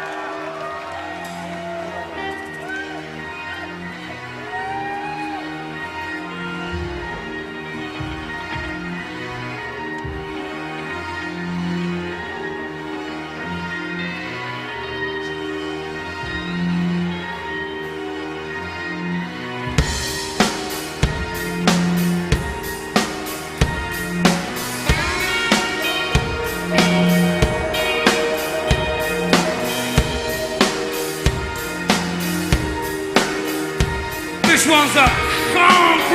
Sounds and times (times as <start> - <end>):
Music: 0.0 - 36.1.